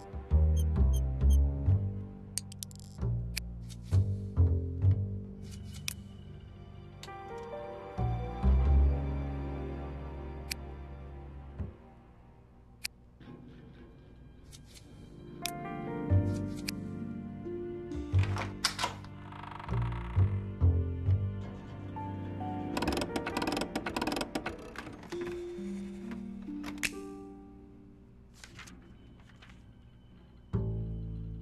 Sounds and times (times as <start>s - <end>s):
Music: 0.0s - 31.4s.